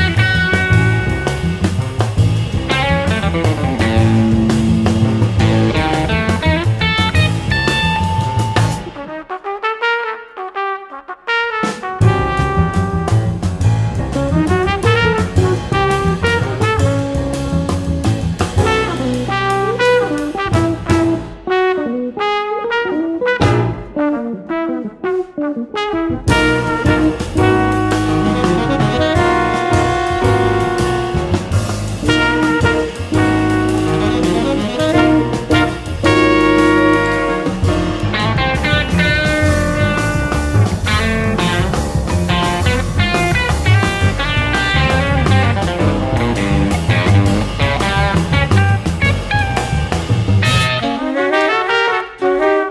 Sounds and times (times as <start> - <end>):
Jazz: 0.0 - 52.7.